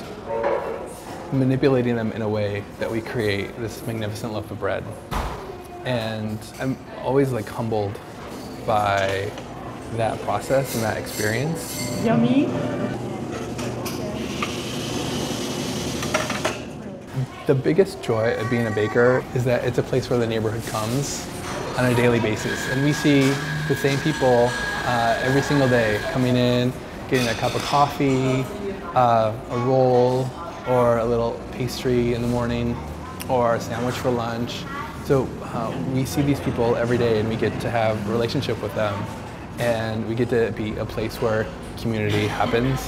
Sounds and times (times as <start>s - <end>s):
Inside, public space: 0.0s - 42.8s.